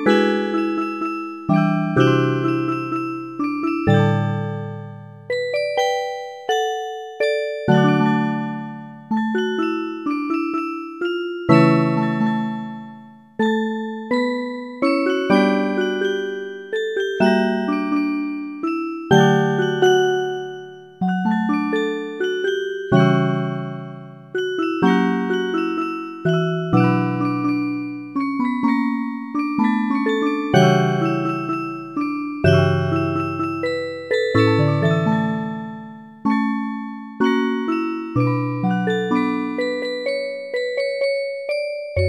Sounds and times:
Jingle (music): 0.0s - 42.0s.

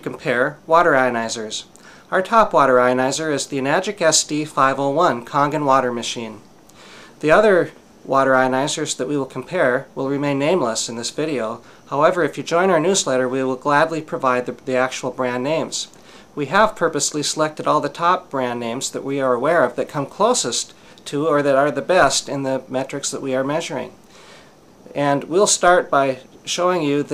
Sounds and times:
Speech: 0.0s - 6.5s, 7.2s - 24.0s, 24.9s - 27.1s.

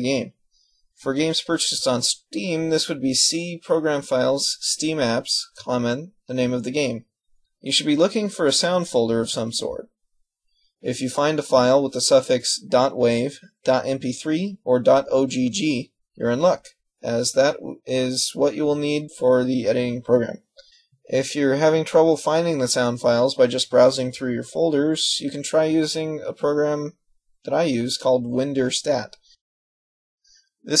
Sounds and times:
Speech: 0.0s - 0.4s, 1.0s - 10.0s, 10.8s - 29.4s.

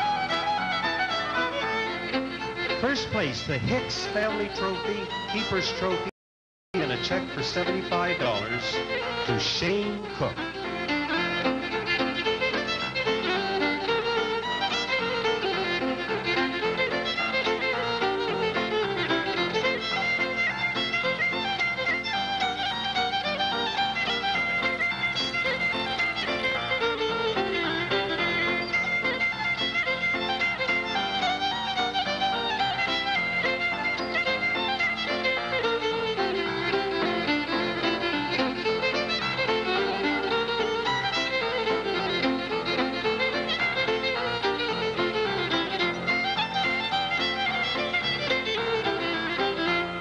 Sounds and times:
Violin, fiddle: 0.0s - 6.2s, 6.8s - 50.0s.

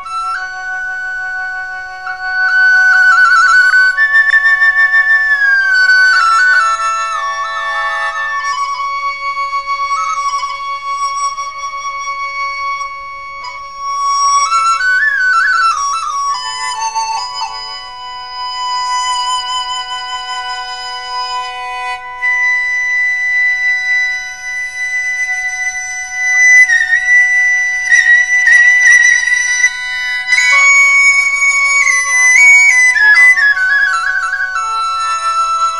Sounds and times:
Flute: 0.0s - 35.7s.

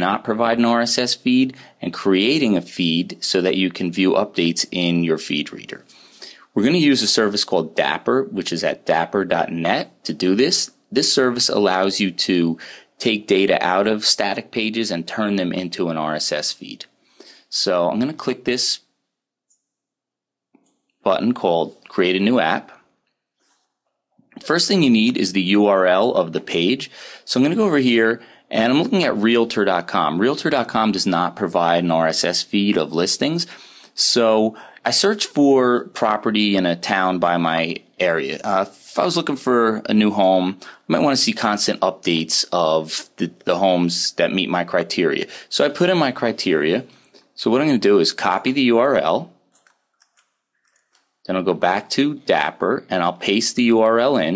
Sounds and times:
Speech: 0.0s - 5.9s, 6.5s - 16.9s, 17.5s - 18.9s, 21.0s - 22.8s, 24.4s - 49.4s, 51.3s - 54.3s.

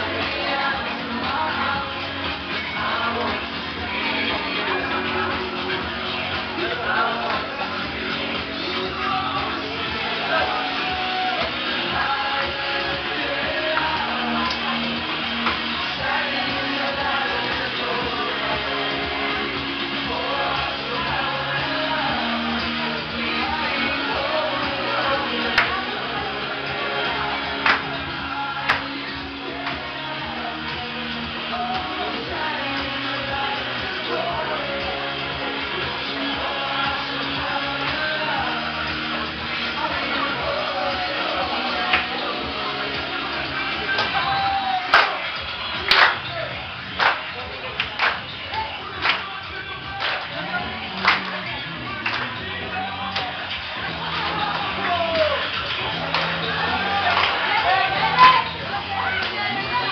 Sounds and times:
Music: 0.0s - 59.9s
Singing: 0.0s - 59.9s.

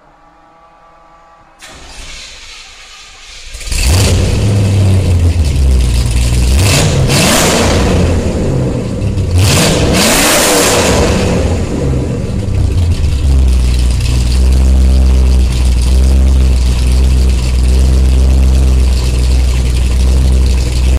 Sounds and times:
Rattle: 2.3s - 7.0s, 12.4s - 20.9s.

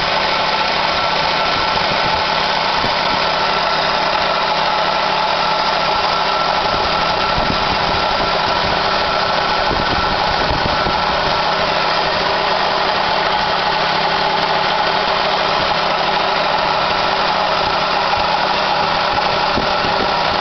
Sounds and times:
Engine: 0.0s - 20.4s
Vehicle: 0.0s - 20.4s.

